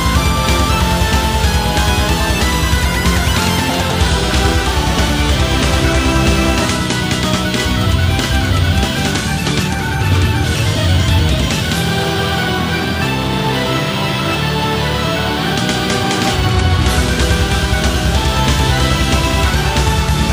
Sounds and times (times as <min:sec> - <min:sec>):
Music: 0:00.0 - 0:20.3.